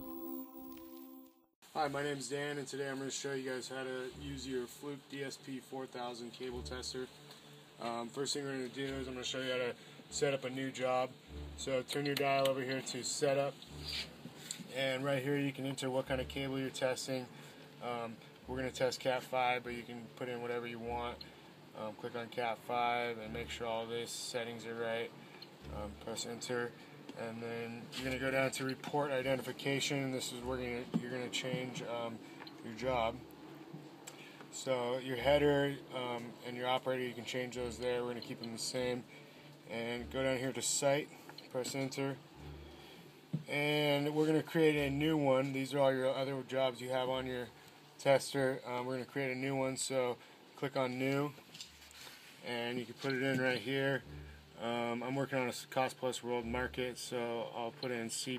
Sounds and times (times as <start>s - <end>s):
Speech: 1.8s - 7.2s, 7.8s - 33.2s, 34.5s - 39.1s, 39.7s - 42.2s, 43.4s - 51.4s, 52.4s - 58.3s.